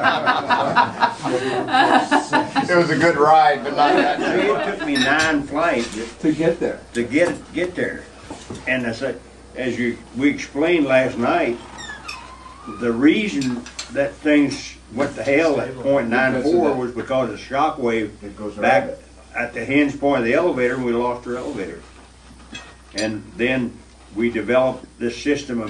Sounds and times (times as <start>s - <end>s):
Speech: 2.7s - 11.6s, 12.8s - 21.9s, 23.0s - 25.6s.